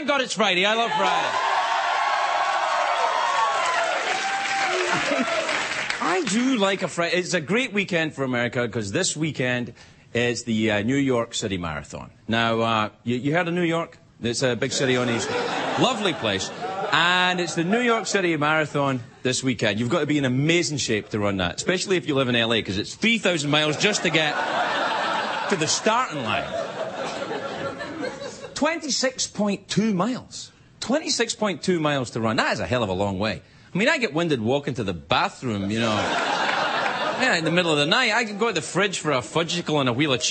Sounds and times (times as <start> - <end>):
Narration, monologue: 0.0 - 1.6, 5.8 - 40.3.